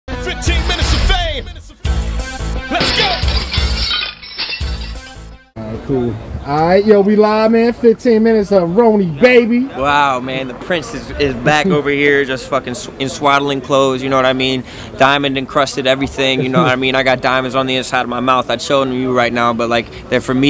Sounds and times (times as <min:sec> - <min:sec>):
Music: 0:00.1 - 0:03.9, 0:04.6 - 0:05.6
Speech: 0:05.6 - 0:20.4.